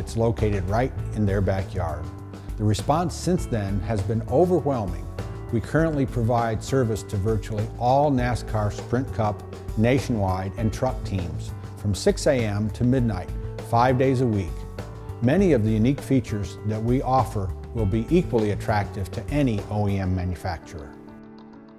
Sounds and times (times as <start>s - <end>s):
Speech: 0.0s - 14.6s, 15.2s - 20.9s
Music: 0.0s - 21.7s.